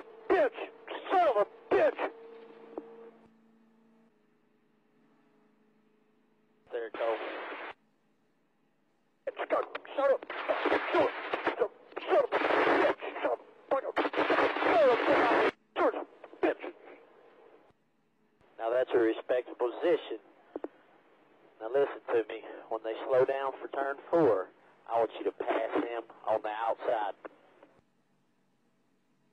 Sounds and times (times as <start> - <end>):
Speech: 0.3 - 2.1, 6.7 - 7.4, 9.3 - 17.0, 18.6 - 20.2, 21.6 - 27.3.